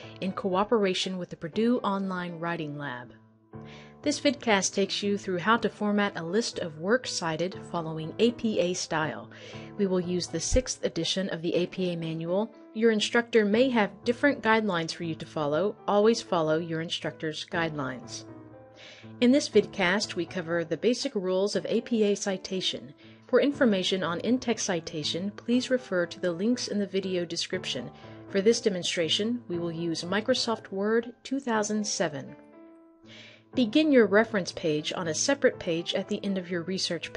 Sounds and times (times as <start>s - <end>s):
Speech: 0.0s - 3.1s, 4.0s - 18.2s, 19.2s - 32.3s, 33.6s - 37.1s
Music: 0.0s - 37.1s.